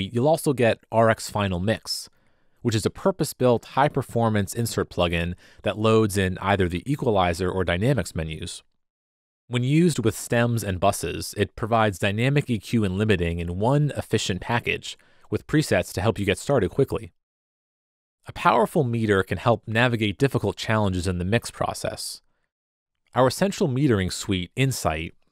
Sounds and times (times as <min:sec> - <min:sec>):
Speech: 0:00.0 - 0:08.7, 0:09.5 - 0:17.2, 0:18.2 - 0:22.2, 0:23.1 - 0:25.3.